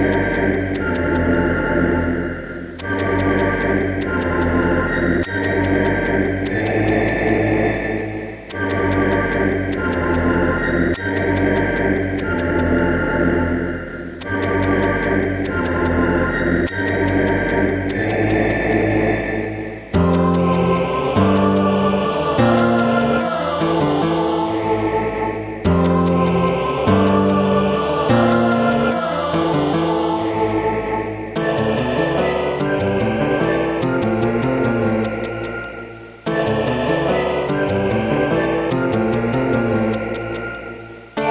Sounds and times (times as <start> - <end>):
Music: 0.0 - 41.3.